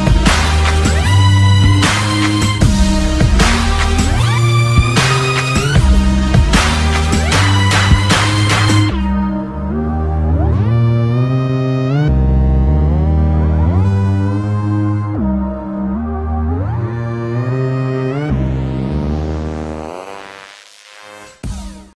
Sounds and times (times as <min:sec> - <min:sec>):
Dubstep: 0:00.0 - 0:09.4, 0:16.9 - 0:21.9.